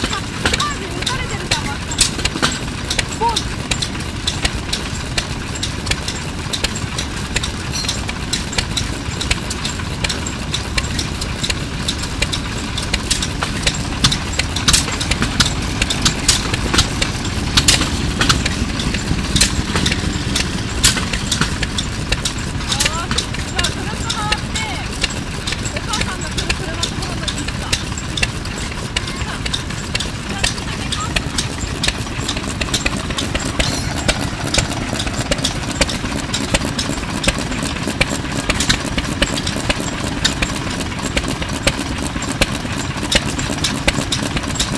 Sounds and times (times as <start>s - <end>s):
Heavy engine (low frequency): 0.0s - 44.7s
Speech: 0.5s - 1.9s, 3.2s - 3.4s, 22.7s - 24.9s, 25.7s - 27.8s, 29.0s - 29.4s, 30.3s - 31.2s.